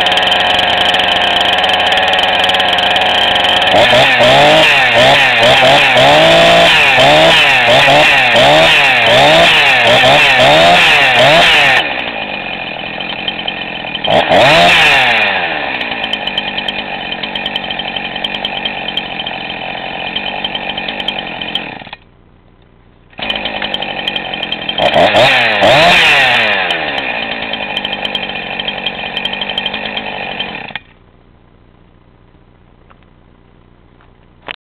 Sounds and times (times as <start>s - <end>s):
Chainsaw: 0.0s - 22.1s, 23.1s - 31.0s.